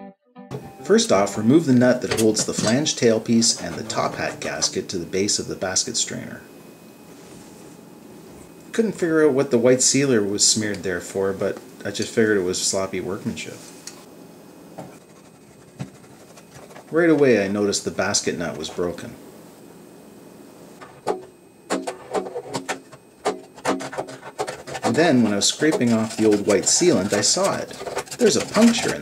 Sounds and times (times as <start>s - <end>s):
Speech: 0.8s - 6.5s, 8.7s - 13.7s, 16.9s - 19.2s, 24.8s - 29.0s.